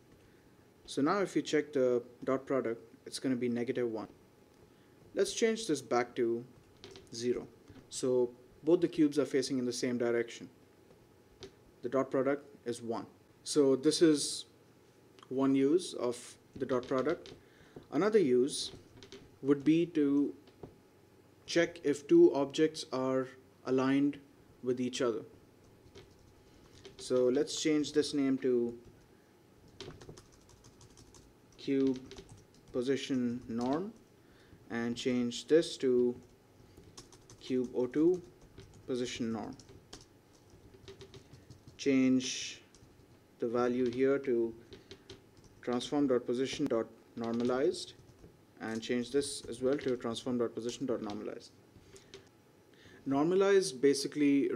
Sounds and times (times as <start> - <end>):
Speech: 0.9 - 4.2, 5.2 - 6.5, 7.2 - 10.5, 11.8 - 14.6, 15.2 - 17.2, 17.9 - 18.7, 19.4 - 20.4, 21.5 - 25.3, 27.0 - 28.8, 31.6 - 32.1, 32.7 - 34.0, 34.7 - 36.2, 37.4 - 38.3, 38.9 - 39.6, 41.8 - 42.7, 43.4 - 44.6, 45.6 - 48.0, 48.6 - 51.6, 53.1 - 54.5
Computer keyboard: 6.6 - 7.8, 16.8 - 17.4, 18.6 - 19.3, 25.6 - 27.6, 29.7 - 34.1, 36.0 - 41.9, 42.7 - 43.2, 43.8 - 44.0, 44.6 - 45.9, 46.5 - 51.3, 51.9 - 52.3.